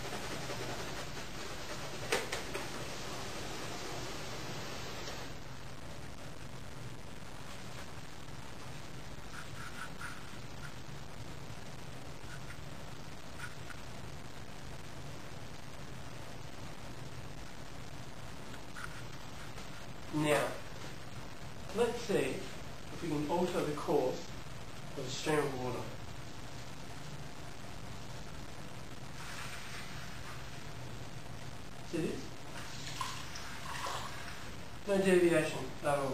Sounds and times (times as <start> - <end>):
Speech: 20.1 - 20.7, 21.7 - 24.3, 25.0 - 26.0, 31.9 - 32.4, 34.9 - 36.1.